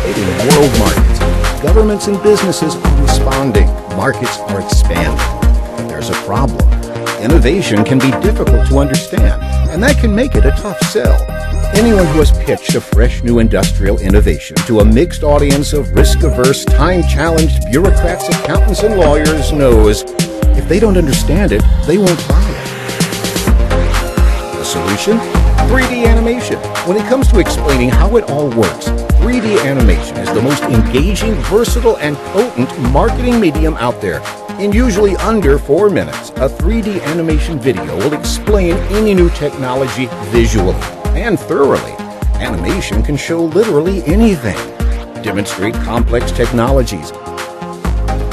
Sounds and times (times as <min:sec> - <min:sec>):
Speech: 0:00.0 - 0:05.3, 0:05.9 - 0:06.6, 0:07.2 - 0:22.6, 0:24.6 - 0:47.2
Music: 0:00.0 - 0:48.3.